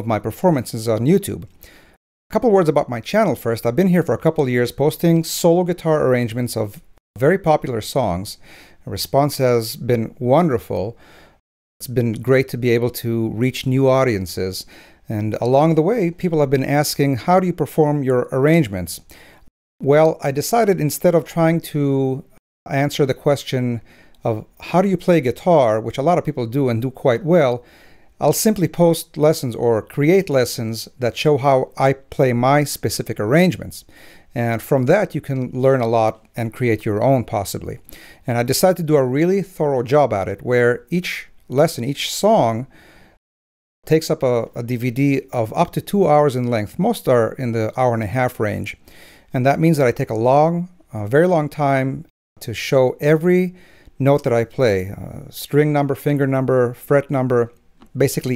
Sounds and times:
Speech: 0:00.0 - 0:01.5, 0:02.3 - 0:11.0, 0:11.8 - 0:19.1, 0:19.8 - 0:27.6, 0:28.2 - 0:42.7, 0:43.8 - 0:58.3.

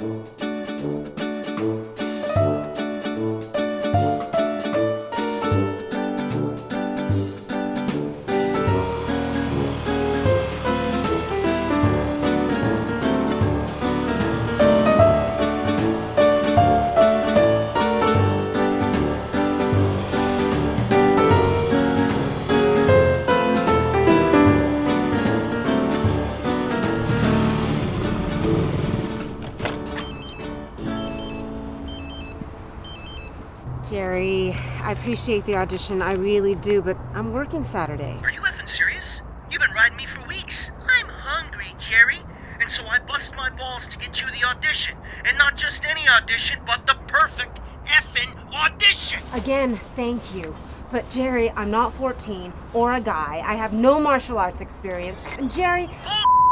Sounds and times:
Music: 0:00.0 - 0:38.2, 0:50.2 - 0:55.2.

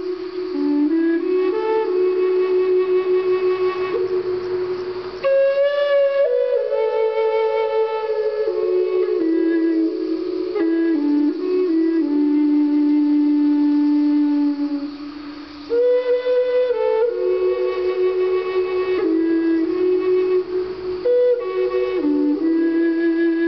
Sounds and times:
Music: 0:00.0 - 0:23.4.

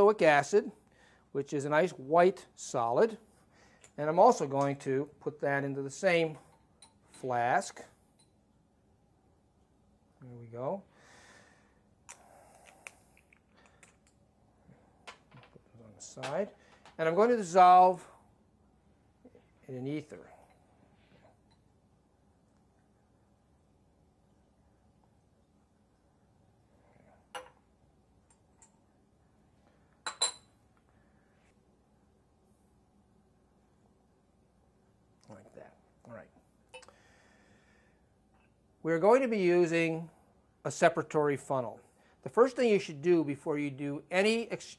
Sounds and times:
Speech: 0:00.0 - 0:00.8, 0:01.4 - 0:03.2, 0:04.0 - 0:06.4, 0:07.2 - 0:07.9, 0:10.2 - 0:10.9, 0:15.7 - 0:18.1, 0:19.7 - 0:20.3, 0:35.2 - 0:36.4, 0:38.8 - 0:40.1, 0:40.7 - 0:44.7
Inside, small room: 0:00.0 - 0:44.7.

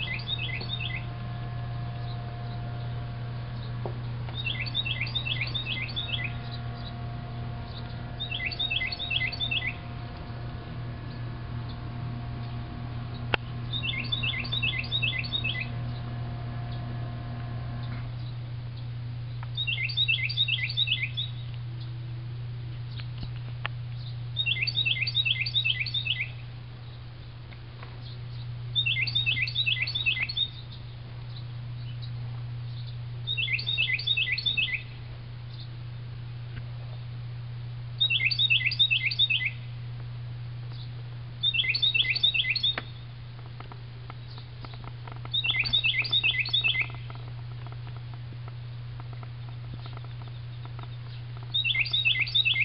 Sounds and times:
Chirp, tweet: 0:00.0 - 0:01.1, 0:02.0 - 0:09.9, 0:12.4 - 0:16.1, 0:17.8 - 0:21.9, 0:24.0 - 0:27.0, 0:28.0 - 0:34.9, 0:35.5 - 0:35.7, 0:38.0 - 0:39.6, 0:40.7 - 0:43.0, 0:44.2 - 0:47.2, 0:49.2 - 0:52.6.

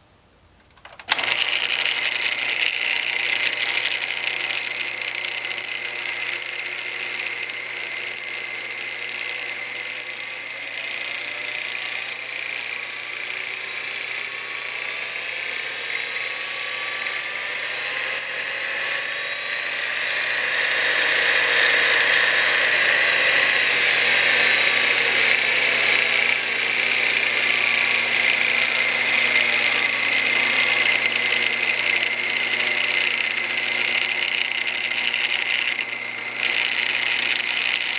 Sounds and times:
Ratchet, pawl: 0:01.1 - 0:19.8, 0:24.4 - 0:37.9
Pulleys: 0:01.1 - 0:37.9.

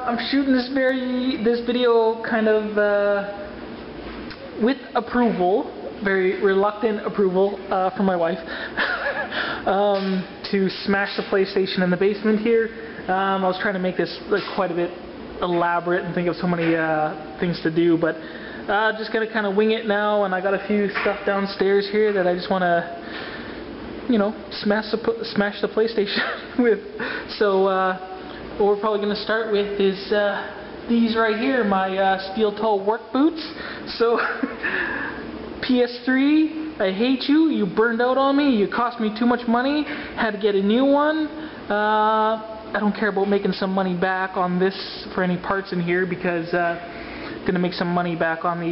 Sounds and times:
Speech: 0:00.0 - 0:03.6, 0:04.3 - 0:08.5, 0:09.6 - 0:23.0, 0:24.1 - 0:34.6, 0:35.6 - 0:48.7.

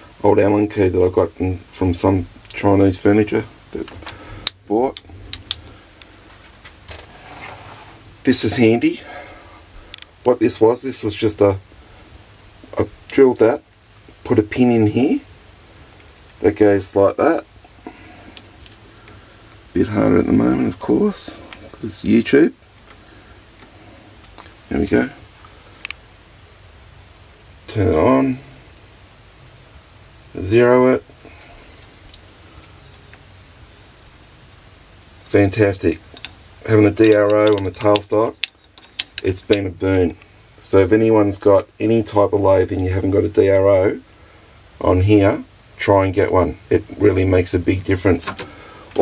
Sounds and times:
Speech: 0:00.2 - 0:03.9, 0:04.7 - 0:05.0, 0:08.2 - 0:09.2, 0:10.2 - 0:11.6, 0:12.7 - 0:13.6, 0:14.2 - 0:15.3, 0:16.4 - 0:17.5, 0:19.8 - 0:22.6, 0:24.7 - 0:25.2, 0:27.7 - 0:28.5, 0:30.3 - 0:31.1, 0:35.3 - 0:36.0, 0:36.6 - 0:38.4, 0:39.2 - 0:44.0, 0:44.8 - 0:48.4.

